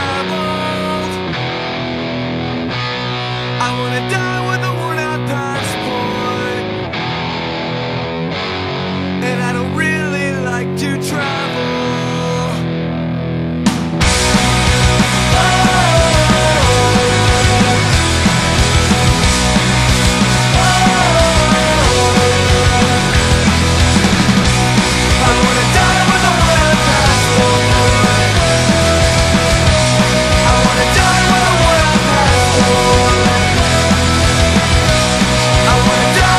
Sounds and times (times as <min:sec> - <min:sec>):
Grunge: 0:00.0 - 0:36.3.